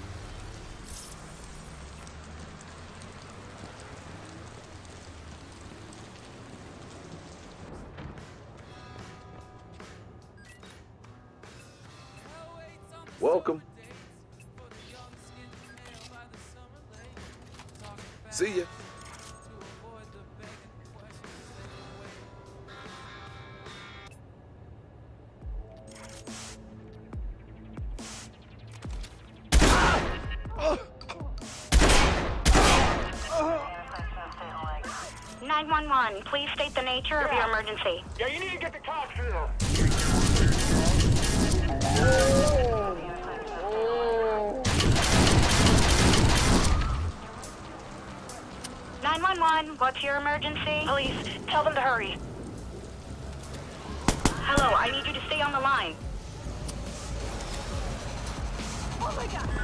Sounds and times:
Music: 7.7s - 24.2s, 25.2s - 43.6s, 45.9s - 51.3s, 54.1s - 59.6s.

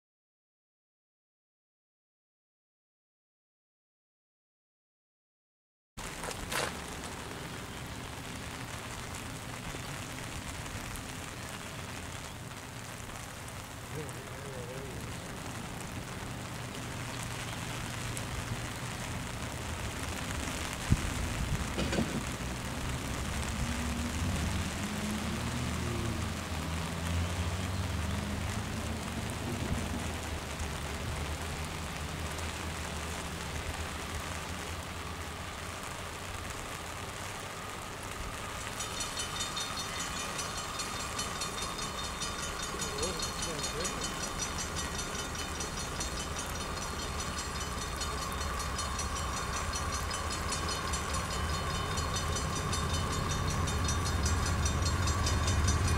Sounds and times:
Rain on surface: 6.0s - 55.9s.

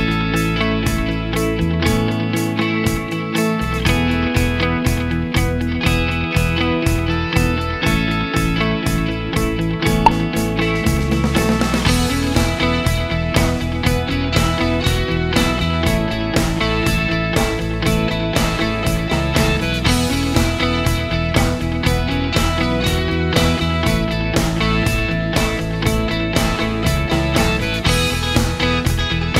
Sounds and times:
Music: 0.0s - 29.3s.

